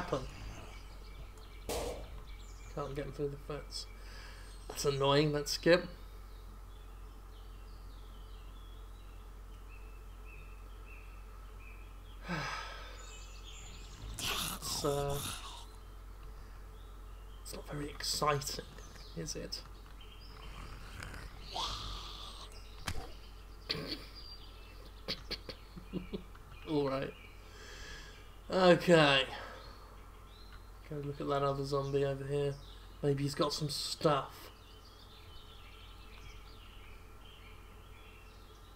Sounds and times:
Outside, rural or natural: 0.0 - 38.7
Speech: 2.8 - 3.9, 4.7 - 6.0, 14.2 - 15.6, 17.5 - 19.7, 26.7 - 27.2, 28.5 - 29.4, 30.9 - 34.5.

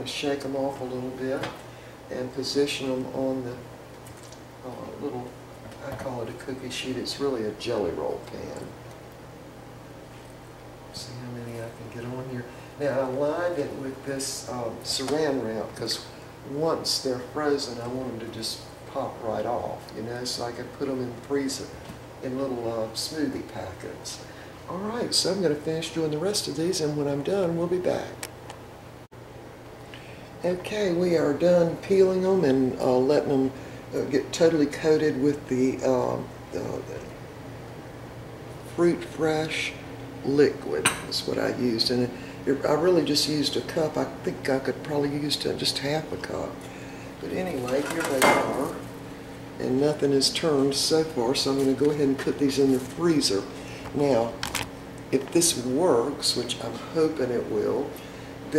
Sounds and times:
Speech: 0.0 - 3.7, 4.6 - 8.8, 10.9 - 28.3, 30.4 - 37.1, 38.7 - 46.6, 47.2 - 48.9, 49.6 - 54.4, 55.1 - 58.5.

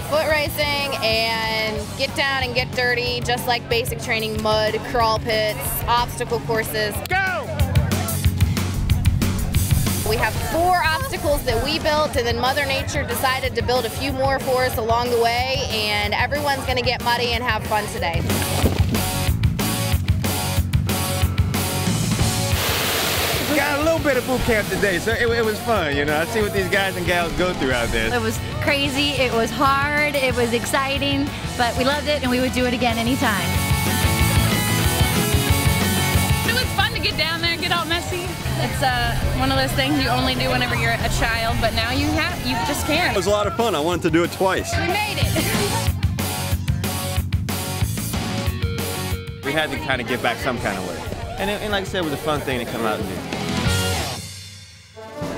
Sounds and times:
Music: 0.0 - 55.3.

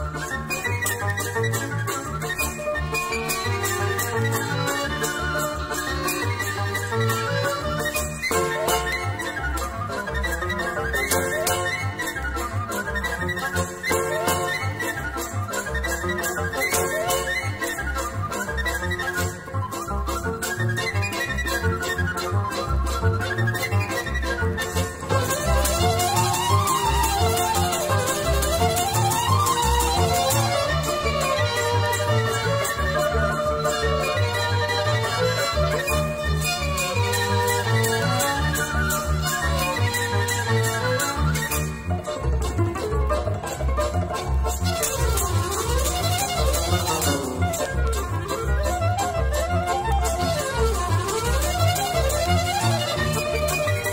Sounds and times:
Middle Eastern music: 0.0 - 53.9.

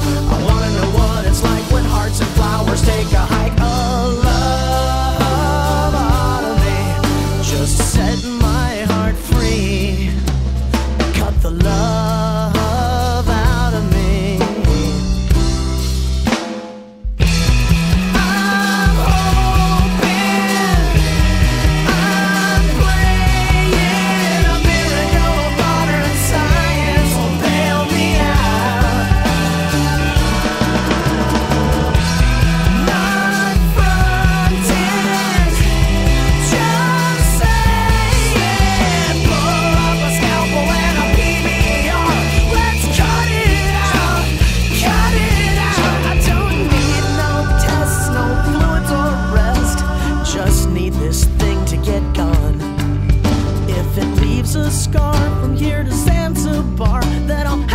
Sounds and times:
Singing: 0.0 - 10.3, 18.1 - 52.8
Grunge: 0.0 - 57.7.

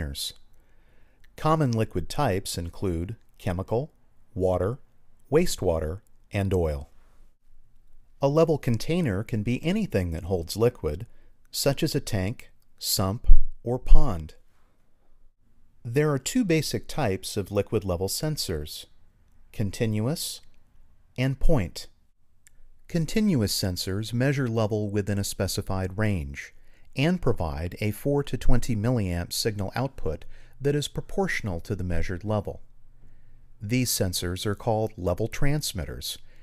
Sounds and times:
Speech: 0.0 - 0.4, 1.4 - 6.9, 8.2 - 14.4, 15.9 - 18.9, 19.5 - 20.5, 21.2 - 21.9, 22.9 - 32.7, 33.6 - 36.3.

